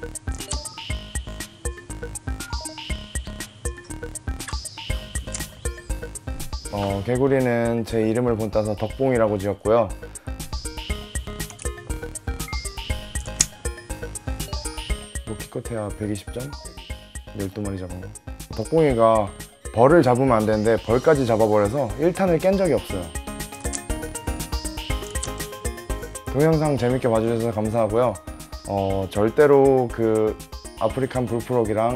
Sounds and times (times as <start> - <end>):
Music: 0.0 - 31.9
Speech: 6.7 - 10.0, 15.3 - 16.6, 17.4 - 23.1, 26.4 - 31.9.